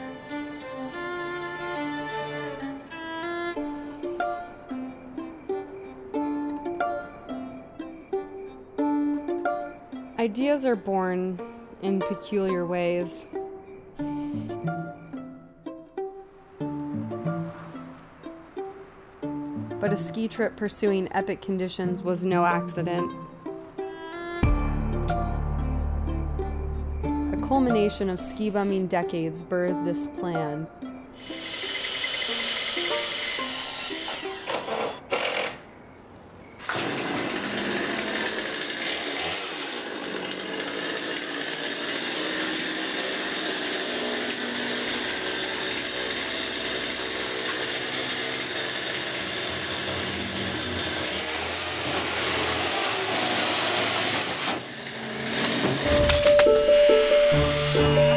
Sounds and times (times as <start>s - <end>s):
Music: 0.0s - 34.9s, 55.8s - 58.1s
Outside, urban or manmade: 0.0s - 58.1s.